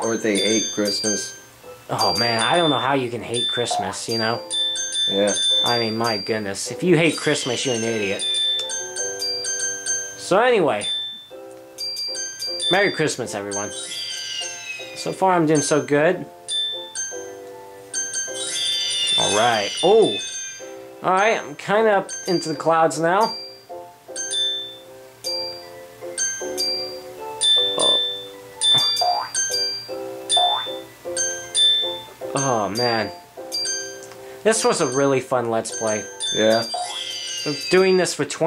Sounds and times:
Speech: 0:00.0 - 0:01.2, 0:01.9 - 0:04.4, 0:05.1 - 0:08.2, 0:10.2 - 0:10.9, 0:12.7 - 0:13.7, 0:15.0 - 0:16.3, 0:34.4 - 0:36.7, 0:37.5 - 0:38.4
Music: 0:00.0 - 0:38.4.

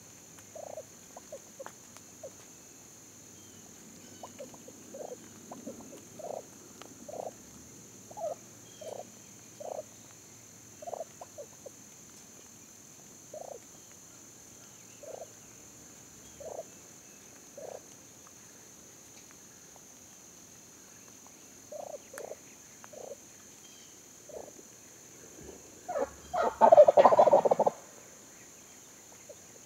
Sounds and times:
Gobble: 0:04.2 - 0:06.5, 0:07.1 - 0:07.4, 0:08.1 - 0:09.8, 0:10.8 - 0:11.6, 0:25.9 - 0:27.9.

